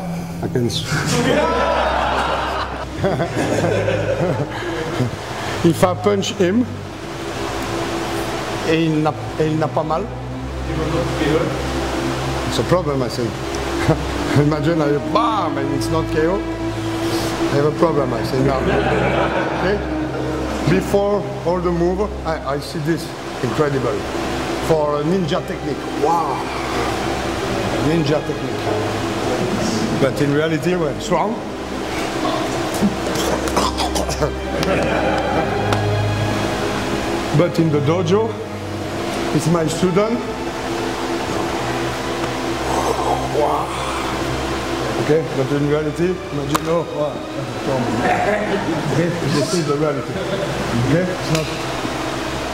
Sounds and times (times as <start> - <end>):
Music: 0.0 - 52.5.